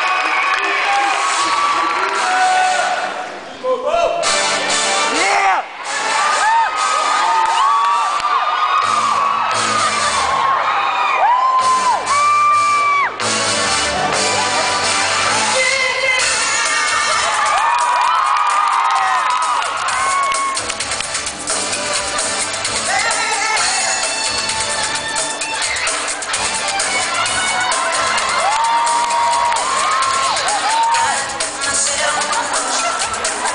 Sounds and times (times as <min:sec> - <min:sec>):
Music: 0:00.3 - 0:03.2, 0:03.9 - 0:33.5.